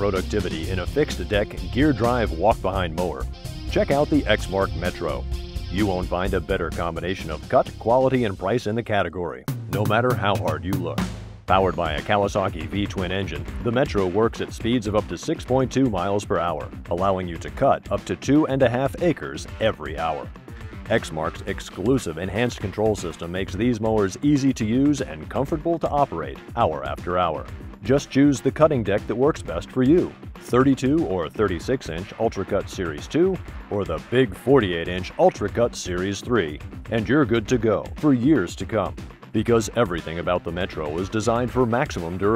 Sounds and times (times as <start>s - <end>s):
Speech: 0.0s - 20.3s, 20.9s - 42.3s
Music: 0.0s - 42.3s.